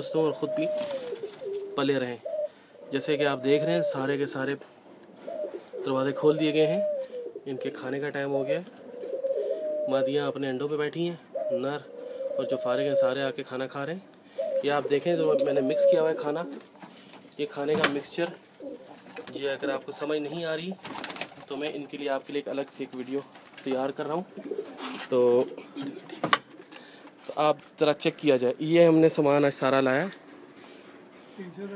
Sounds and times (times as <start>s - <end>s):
Speech: 0.0s - 0.9s, 3.0s - 4.7s, 7.5s - 8.7s, 9.9s - 14.0s, 14.6s - 16.6s, 17.4s - 18.4s, 19.3s - 20.8s, 21.5s - 24.3s, 25.1s - 25.6s, 27.3s - 30.2s, 31.4s - 31.7s
Pigeon, dove: 0.0s - 4.1s, 5.1s - 10.1s, 14.3s - 17.0s, 17.6s - 22.1s.